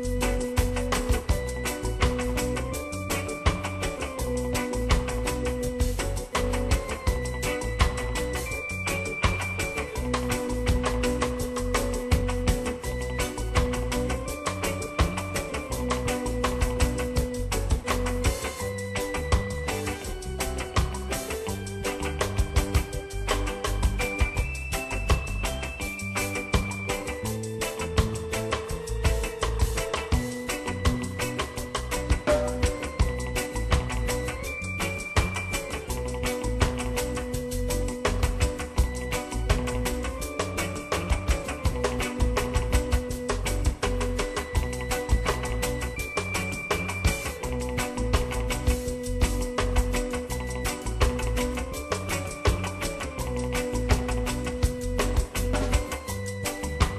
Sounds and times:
Music: 0:00.0 - 0:56.9.

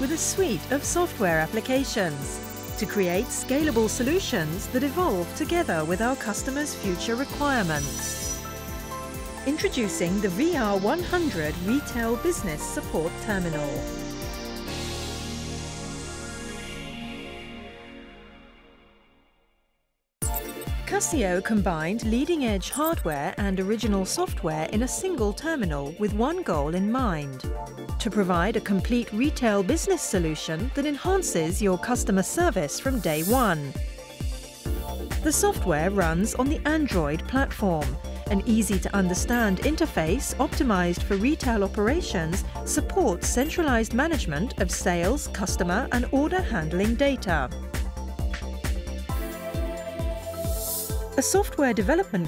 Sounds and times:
Speech: 0:00.0 - 0:08.4, 0:09.5 - 0:13.8, 0:20.9 - 0:27.4, 0:28.0 - 0:33.7, 0:35.3 - 0:47.5, 0:51.2 - 0:52.2
Music: 0:00.0 - 0:52.2.

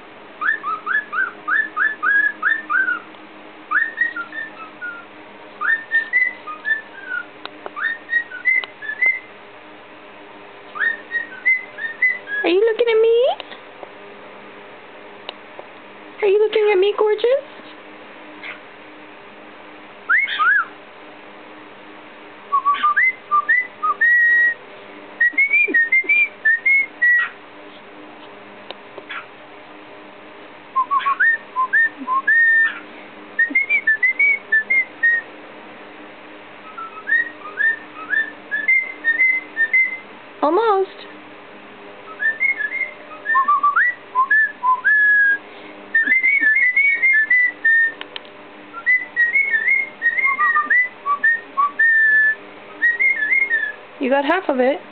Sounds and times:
Whistling: 0:00.4 - 0:03.1, 0:03.7 - 0:09.3, 0:10.8 - 0:12.5, 0:20.1 - 0:20.8, 0:22.5 - 0:24.6, 0:25.2 - 0:27.4, 0:30.8 - 0:32.8, 0:33.4 - 0:35.3, 0:36.6 - 0:40.1, 0:42.1 - 0:45.4, 0:46.0 - 0:48.0, 0:48.7 - 0:53.8.

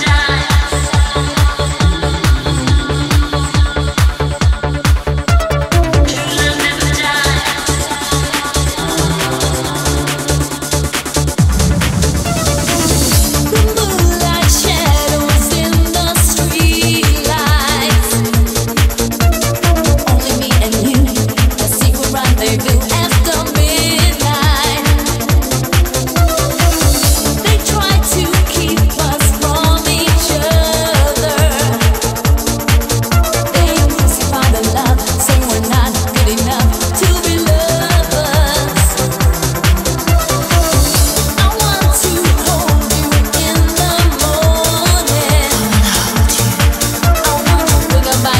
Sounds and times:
Music: 0:00.0 - 0:48.3.

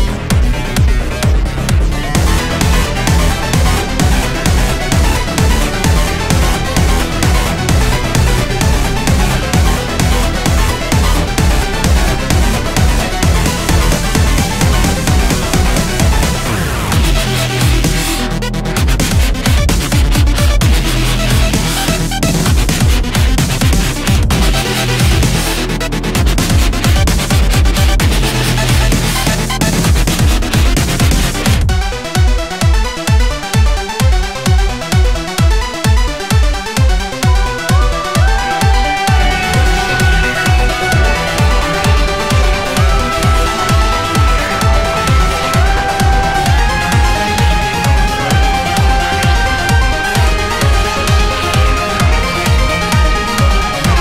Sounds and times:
Music: 0:00.0 - 0:54.0.

